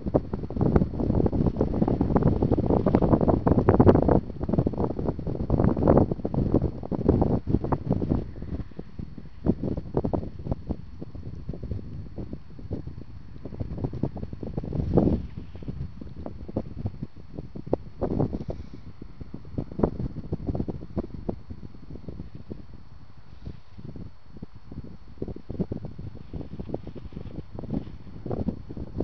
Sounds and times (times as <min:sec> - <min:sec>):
Wind noise (microphone): 0:00.0 - 0:29.0.